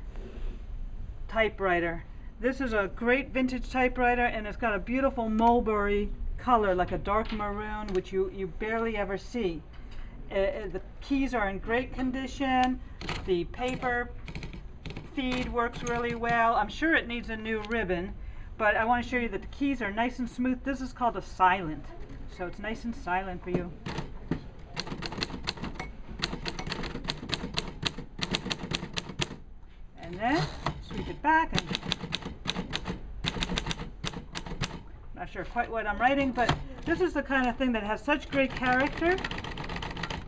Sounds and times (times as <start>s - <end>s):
Speech: 1.3s - 9.6s, 30.0s - 31.6s, 35.2s - 39.3s
Typewriter: 13.0s - 16.4s, 24.8s - 29.4s, 31.5s - 34.8s, 38.3s - 40.2s.